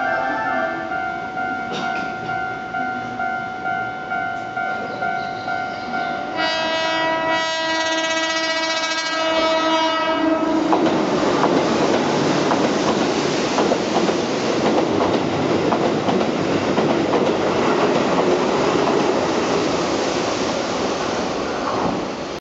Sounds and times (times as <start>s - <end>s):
Outside, urban or manmade: 0.0s - 22.4s
Train: 0.0s - 22.4s.